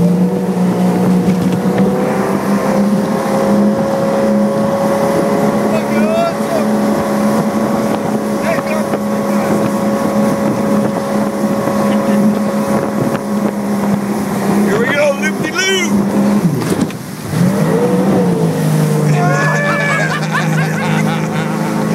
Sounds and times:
Motorboat, speedboat: 0:00.0 - 0:21.9
Speech: 0:05.7 - 0:06.7, 0:08.4 - 0:09.6, 0:14.7 - 0:16.0.

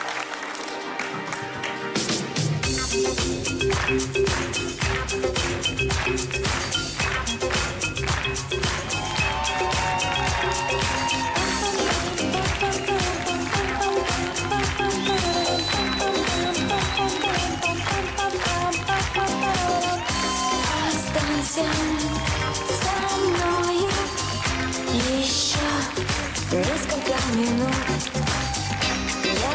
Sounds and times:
Music: 0:00.0 - 0:29.5
Female singing: 0:11.4 - 0:28.2, 0:29.2 - 0:29.5.

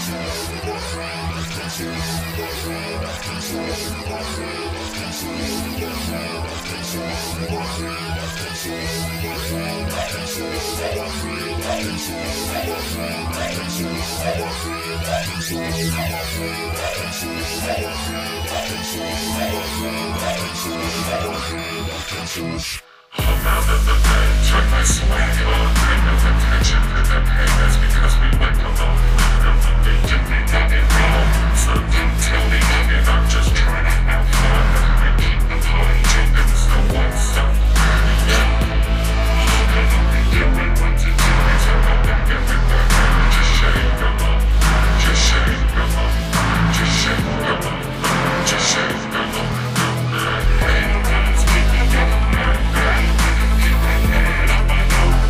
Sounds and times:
Music: 0:00.0 - 0:55.2.

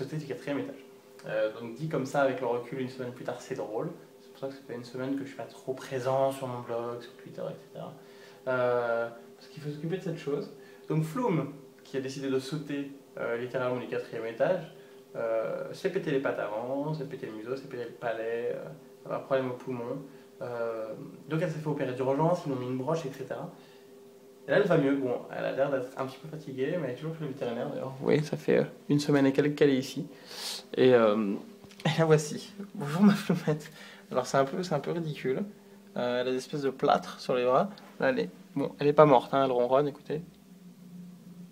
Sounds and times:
Speech: 0:00.0 - 0:23.6, 0:24.5 - 0:40.3.

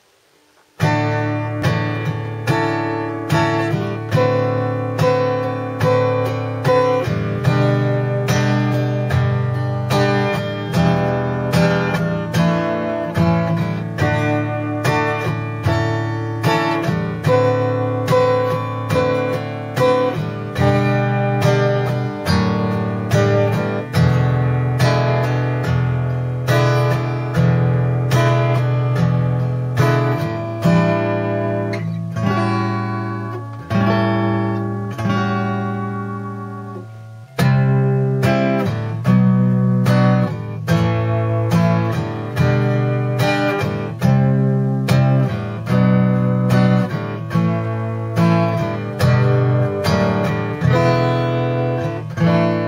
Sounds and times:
Acoustic guitar: 0:00.0 - 0:52.6
Strum: 0:00.0 - 0:52.6.

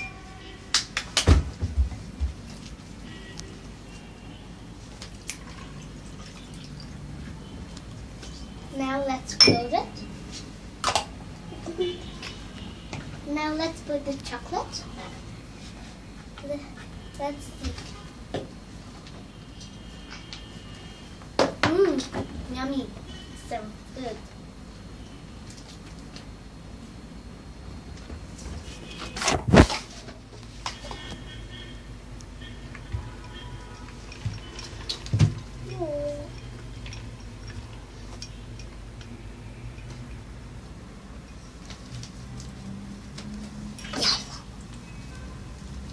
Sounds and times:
Child speech, kid speaking: 0:08.7 - 0:10.0, 0:13.3 - 0:14.9, 0:16.4 - 0:17.9, 0:21.6 - 0:24.3, 0:35.7 - 0:36.3.

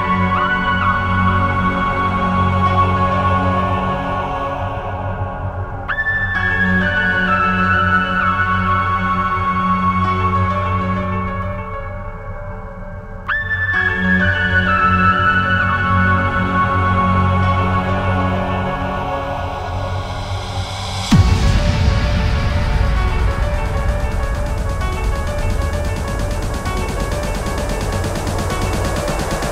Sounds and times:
Background music: 0:00.0 - 0:29.5.

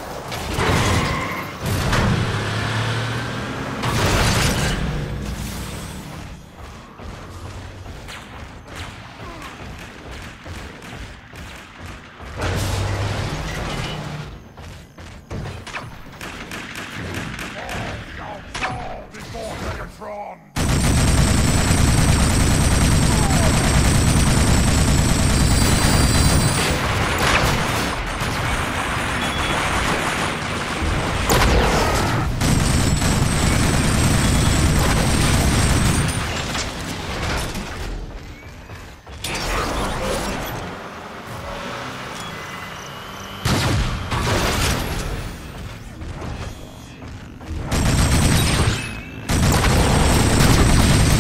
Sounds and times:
Speech: 0:17.6 - 0:20.5.

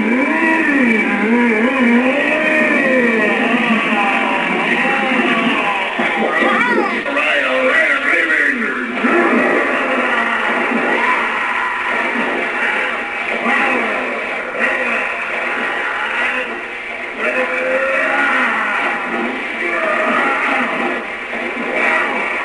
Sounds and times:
Speech: 0:02.4 - 0:09.0, 0:17.2 - 0:18.9.

